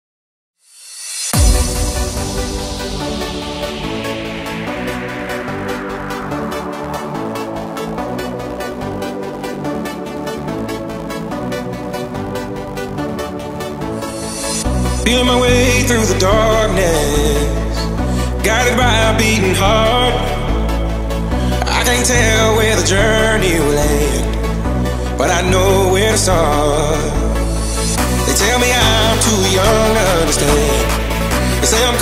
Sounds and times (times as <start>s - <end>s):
Techno: 1.3s - 32.0s.